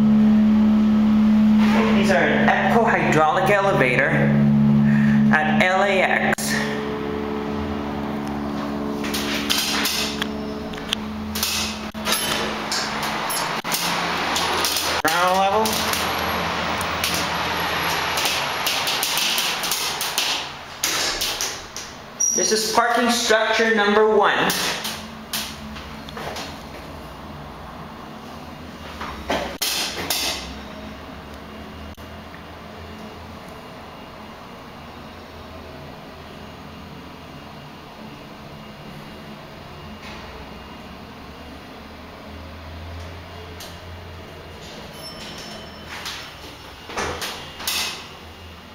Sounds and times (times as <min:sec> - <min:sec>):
Speech: 0:01.7 - 0:04.4, 0:05.3 - 0:06.7, 0:15.0 - 0:15.9, 0:22.4 - 0:24.8.